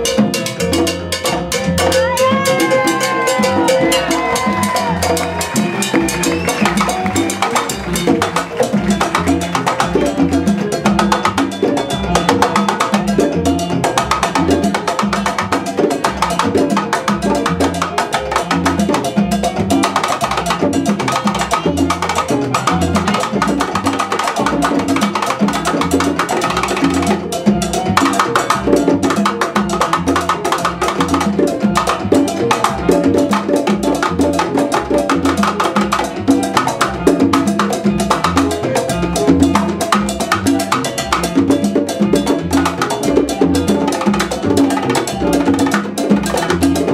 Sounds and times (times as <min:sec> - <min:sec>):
Drum: 0:00.0 - 0:46.9
Wood block: 0:00.0 - 0:46.9.